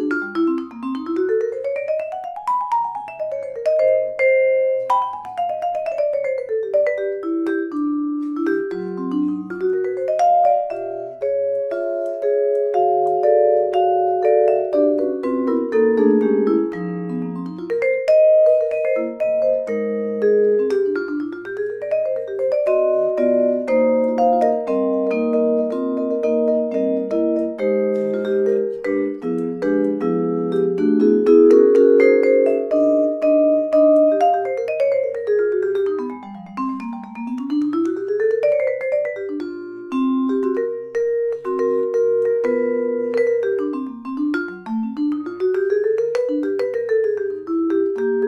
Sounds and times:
Vibraphone: 0:00.0 - 0:48.2.

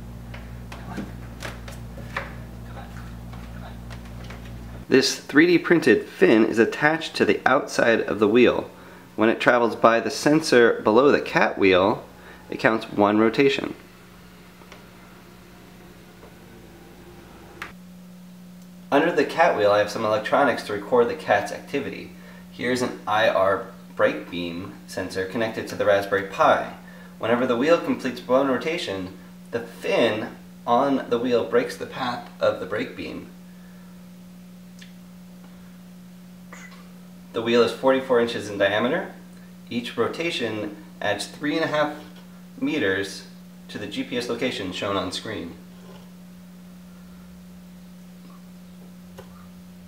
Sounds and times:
Speech: 0:04.9 - 0:13.8, 0:18.9 - 0:33.4, 0:37.3 - 0:45.7.

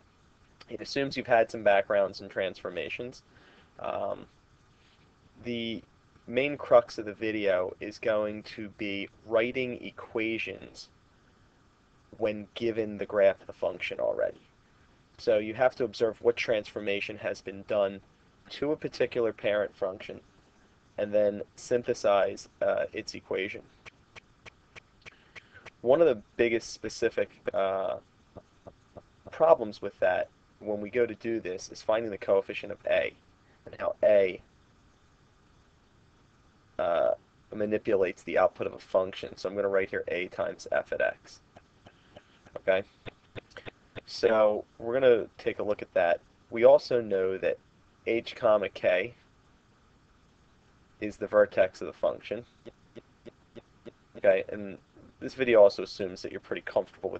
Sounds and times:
Speech: 0:00.6 - 0:03.2, 0:03.8 - 0:04.3, 0:05.4 - 0:10.9, 0:12.2 - 0:14.4, 0:15.2 - 0:20.2, 0:21.0 - 0:23.6, 0:25.8 - 0:28.0, 0:29.3 - 0:33.1, 0:33.7 - 0:34.4, 0:36.8 - 0:41.4, 0:42.6 - 0:42.9, 0:43.6 - 0:49.2, 0:51.0 - 0:52.5, 0:54.2 - 0:57.1.

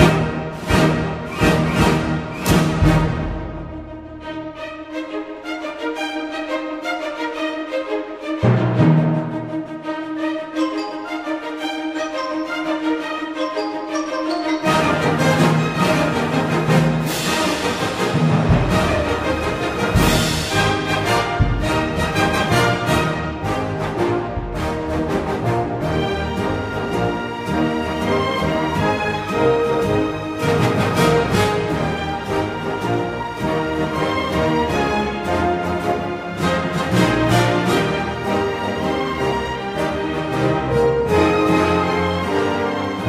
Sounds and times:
Music: 0:00.0 - 0:43.0.

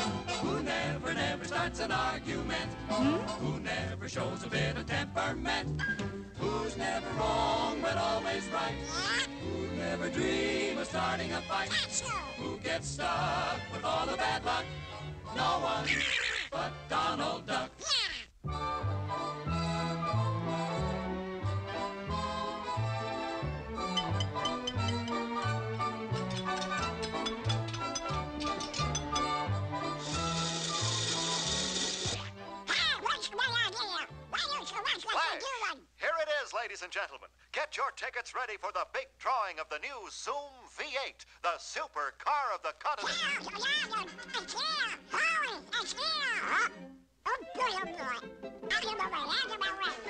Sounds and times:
Music: 0:00.0 - 0:17.8, 0:18.4 - 0:34.8, 0:43.1 - 0:50.0.

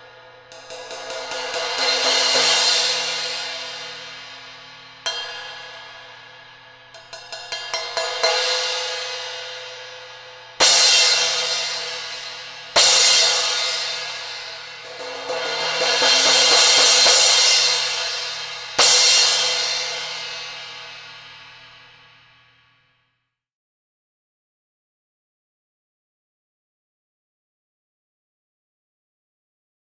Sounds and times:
Music: 0:00.0 - 0:23.5.

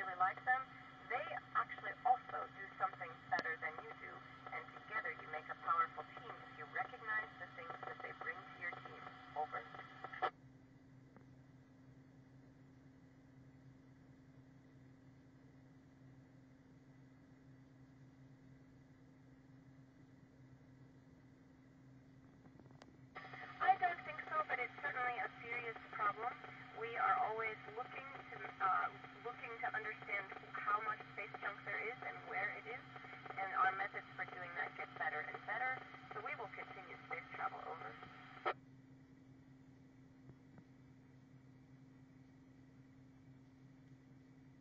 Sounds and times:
Radio: 0:00.0 - 0:10.3, 0:23.2 - 0:38.6
Speech: 0:00.0 - 0:10.3, 0:23.2 - 0:38.1.

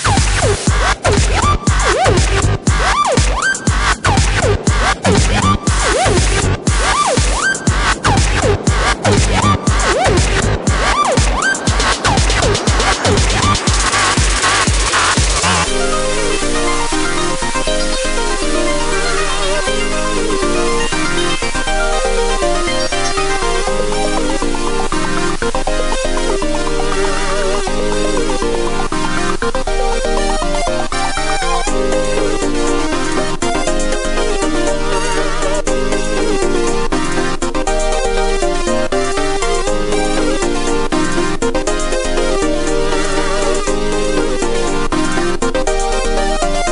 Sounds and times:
Music: 0:00.0 - 0:46.7.

